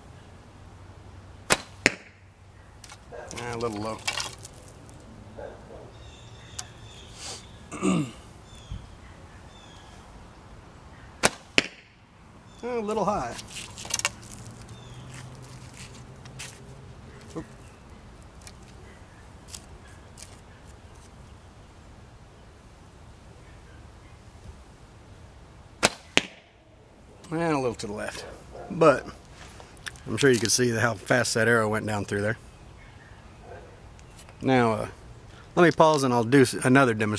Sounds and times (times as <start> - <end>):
Arrow: 1.5 - 2.2, 11.2 - 11.9, 25.8 - 26.5.